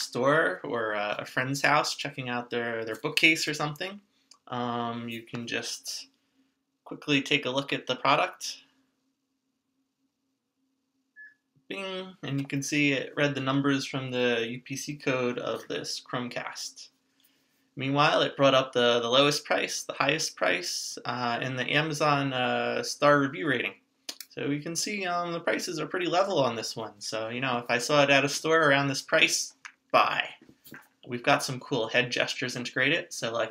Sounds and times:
Speech: 0.0s - 6.1s, 6.9s - 8.6s, 11.7s - 16.9s, 17.8s - 33.5s.

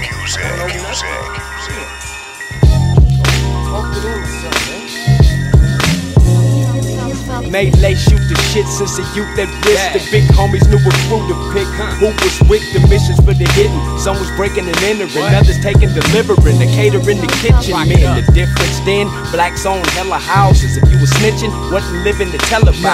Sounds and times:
Music: 0.0s - 22.9s.

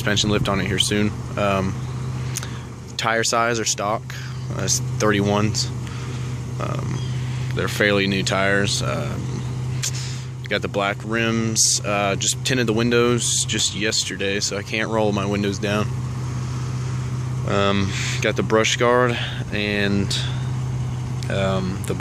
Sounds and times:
Speech: 0.0s - 1.8s, 3.0s - 5.8s, 6.6s - 7.0s, 7.6s - 9.4s, 10.4s - 15.9s, 17.4s - 20.4s, 21.2s - 22.0s
Vehicle: 0.0s - 22.0s.

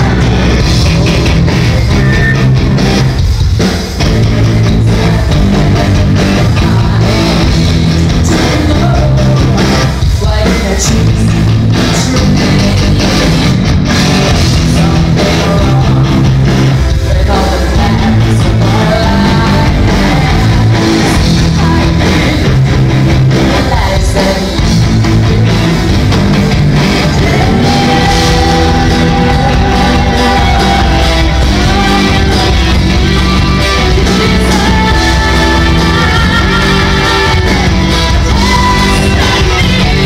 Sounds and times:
Music: 0.0s - 40.0s
Female singing: 4.0s - 13.5s, 14.7s - 16.3s, 17.0s - 22.7s, 23.5s - 24.7s, 26.9s - 40.0s.

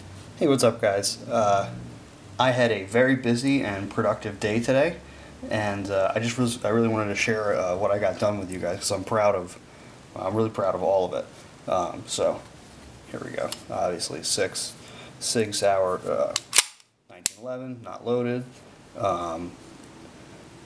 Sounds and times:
Inside, small room: 0.0s - 20.6s
Speech: 0.4s - 1.8s, 2.4s - 9.6s, 10.2s - 12.5s, 13.1s - 16.4s, 17.1s - 19.6s.

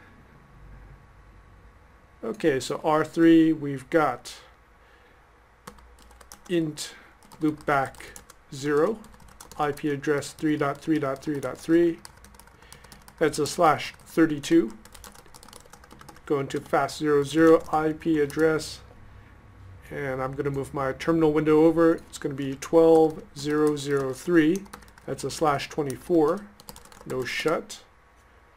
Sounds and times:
Speech: 2.2s - 4.5s, 6.5s - 9.0s, 9.6s - 12.0s, 13.2s - 14.8s, 16.3s - 18.9s, 19.9s - 27.9s
Typing: 5.7s - 6.5s, 7.2s - 18.8s, 21.9s - 27.7s.

